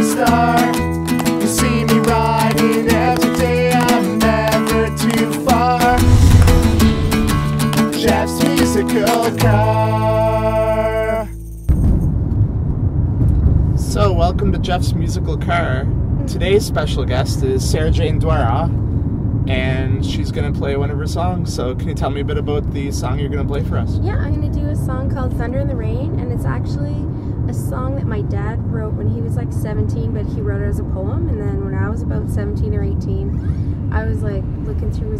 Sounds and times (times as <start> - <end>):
Car: 11.4 - 35.1
Speech: 13.8 - 18.7, 19.5 - 35.1.